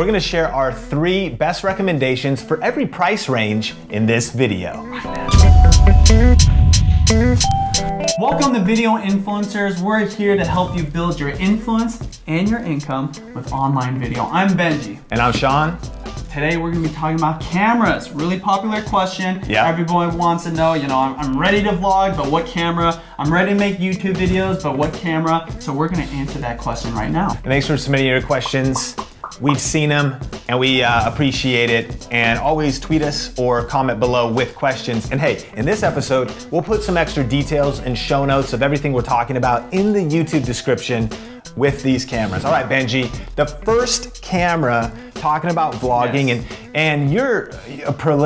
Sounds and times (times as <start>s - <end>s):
Speech: 0.0s - 6.0s, 8.2s - 48.2s
Music: 0.0s - 48.2s.